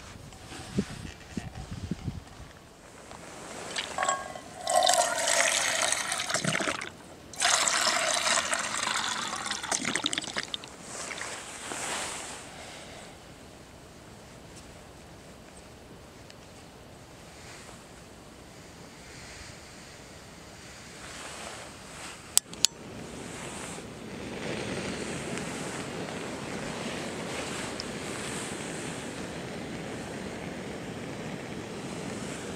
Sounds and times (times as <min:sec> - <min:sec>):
Fill (with liquid): 0:03.7 - 0:11.4.